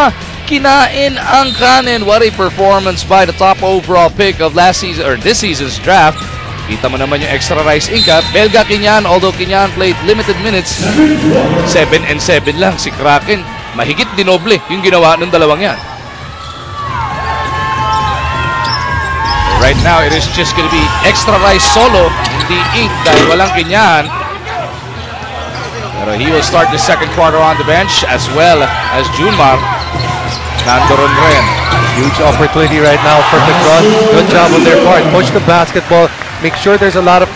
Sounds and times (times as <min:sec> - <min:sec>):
Speech: 0:00.0 - 0:15.8, 0:19.5 - 0:24.2, 0:25.8 - 0:29.7, 0:30.7 - 0:37.3.